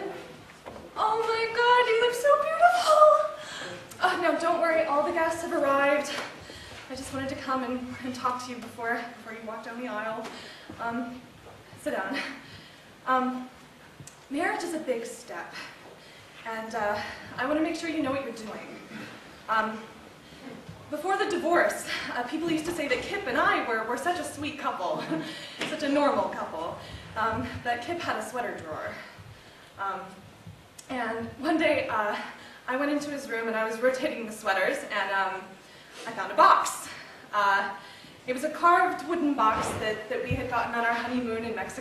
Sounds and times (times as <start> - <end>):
Narration, monologue: 0.0 - 41.8.